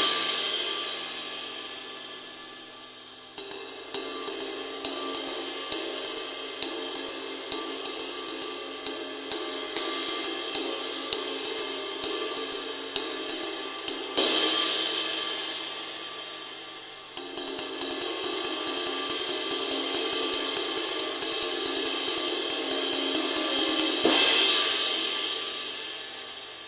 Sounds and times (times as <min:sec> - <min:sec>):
Music: 0:00.0 - 0:26.6.